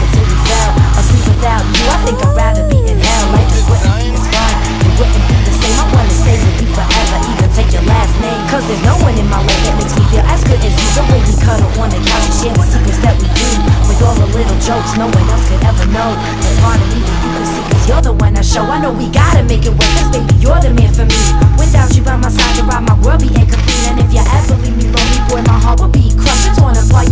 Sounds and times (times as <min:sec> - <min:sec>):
Music: 0:00.0 - 0:27.1.